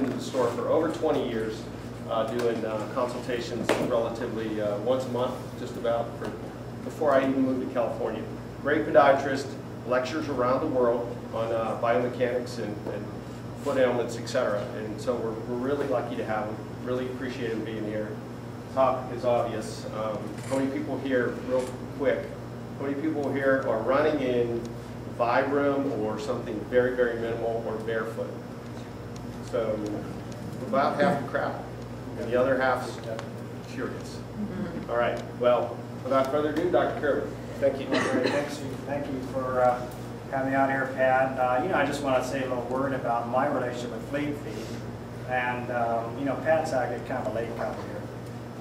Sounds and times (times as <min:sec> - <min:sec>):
Speech: 0:00.0 - 0:28.4, 0:29.4 - 0:48.1.